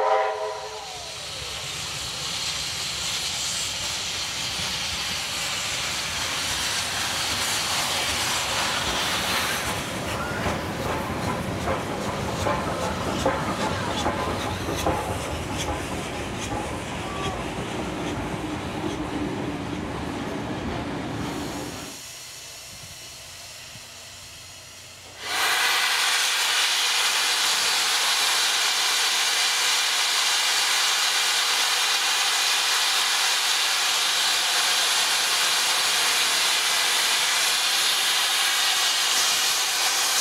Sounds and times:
Hiss: 0.0s - 40.2s
Railroad car, train wagon: 0.0s - 40.2s
Train: 0.0s - 40.2s
Clickety-clack: 8.6s - 19.9s.

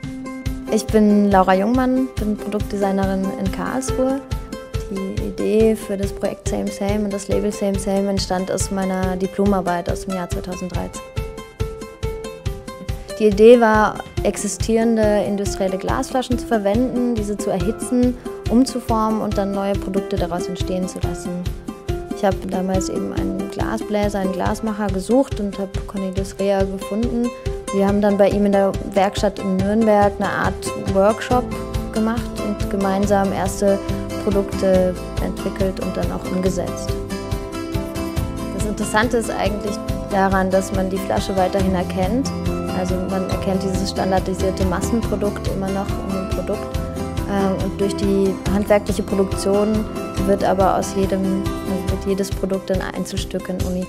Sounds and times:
Music: 0.0s - 53.8s
Speech: 0.7s - 4.2s, 4.9s - 11.0s, 13.2s - 21.5s, 22.2s - 37.0s, 38.6s - 46.7s, 47.3s - 53.8s.

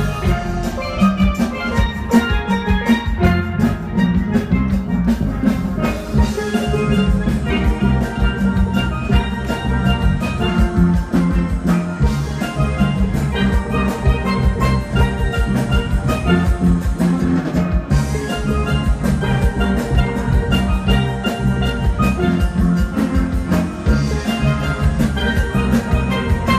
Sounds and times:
Drum: 0.0s - 26.5s
Steelpan: 0.0s - 26.5s.

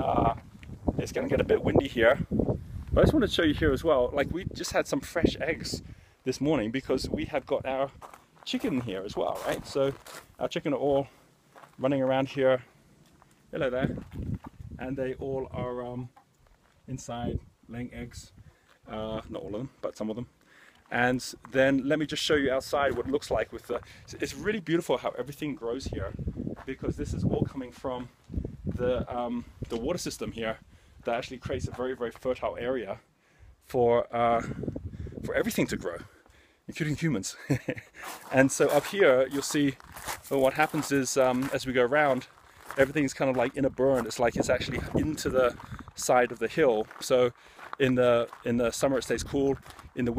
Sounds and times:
Speech: 0.0s - 0.4s, 1.0s - 2.3s, 3.0s - 11.1s, 11.8s - 12.7s, 13.5s - 14.0s, 14.8s - 16.2s, 16.9s - 18.3s, 18.9s - 20.3s, 20.9s - 28.1s, 28.8s - 33.0s, 33.6s - 34.6s, 35.2s - 37.5s, 38.2s - 50.1s.

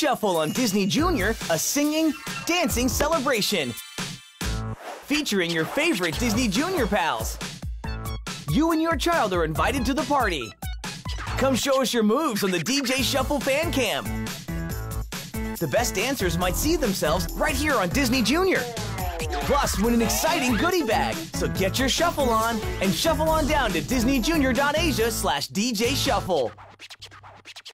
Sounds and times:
Speech: 0.0s - 3.8s, 5.1s - 7.4s, 8.5s - 10.5s, 11.4s - 14.1s, 15.6s - 26.5s
Music: 0.0s - 27.7s.

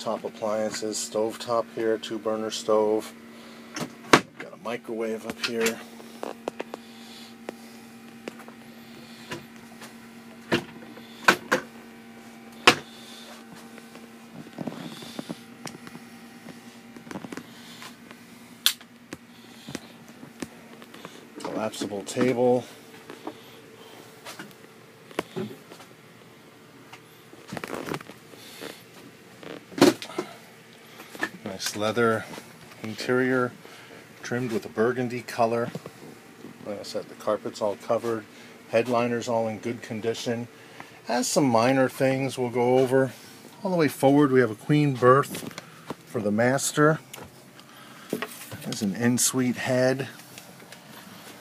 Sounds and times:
Speech: 0.0s - 3.2s, 4.4s - 5.9s, 21.4s - 22.7s, 31.4s - 33.6s, 34.2s - 35.8s, 36.6s - 45.4s, 46.1s - 47.0s, 48.6s - 50.2s.

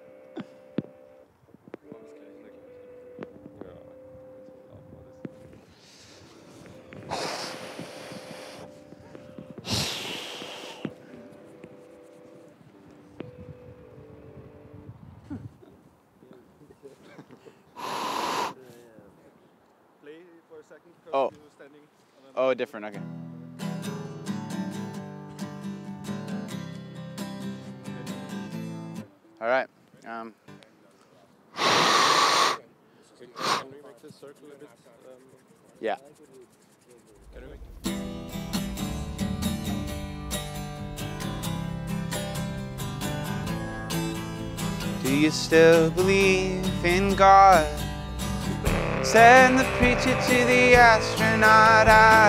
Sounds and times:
Music: 0.0s - 15.2s, 22.8s - 29.6s, 37.4s - 52.2s
Speech: 1.9s - 2.7s, 32.6s - 37.8s.

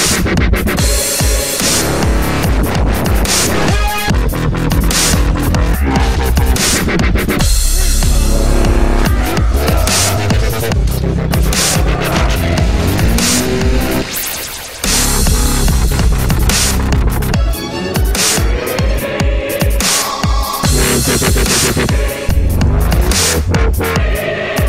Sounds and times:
Dubstep: 0.0s - 24.6s.

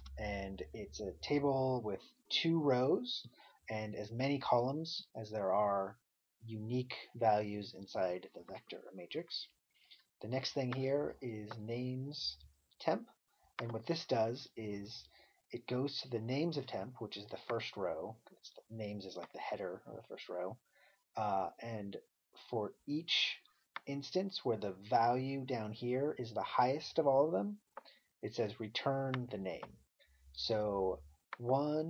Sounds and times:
Narration, monologue: 0.0s - 31.8s.

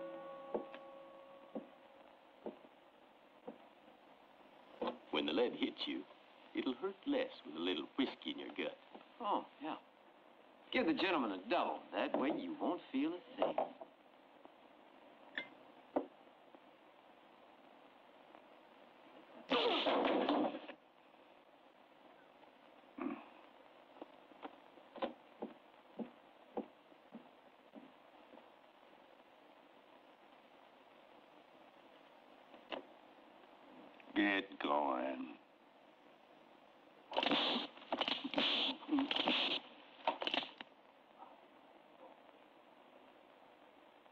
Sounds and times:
Inside, small room: 0.0s - 44.1s.

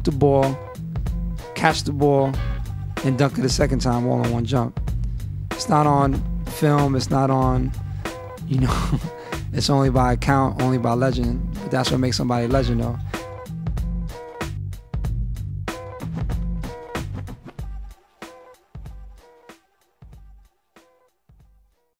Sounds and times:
Speech: 0.0s - 0.7s, 1.6s - 2.4s, 3.0s - 4.8s, 5.6s - 7.7s, 8.5s - 8.9s, 9.5s - 13.0s
Music: 0.0s - 21.9s.

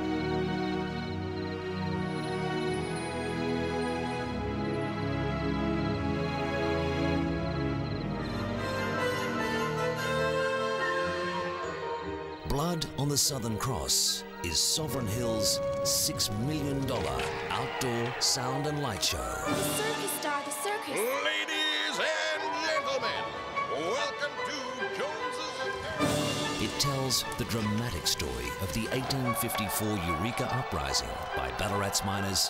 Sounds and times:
Music: 0.0s - 32.4s
Speech: 12.5s - 20.2s, 26.6s - 32.4s.

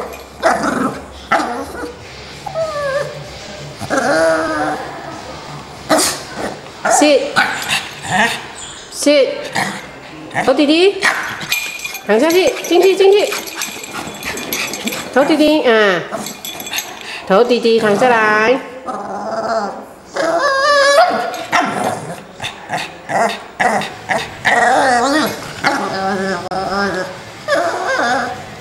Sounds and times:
Speech: 12.1s - 13.4s, 17.3s - 18.8s.

